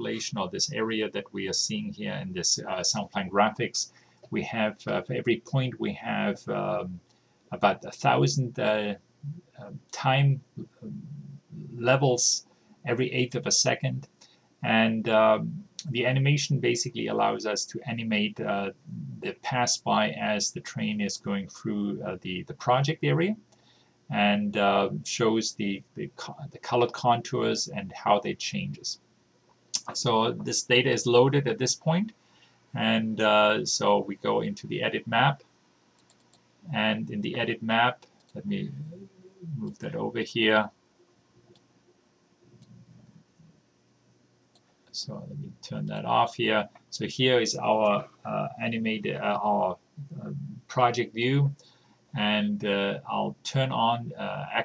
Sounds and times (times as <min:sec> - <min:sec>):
Speech: 0:00.0 - 0:07.0, 0:07.6 - 0:23.4, 0:24.1 - 0:29.0, 0:29.8 - 0:32.2, 0:32.8 - 0:35.4, 0:36.7 - 0:40.7, 0:45.0 - 0:51.6, 0:52.2 - 0:54.6.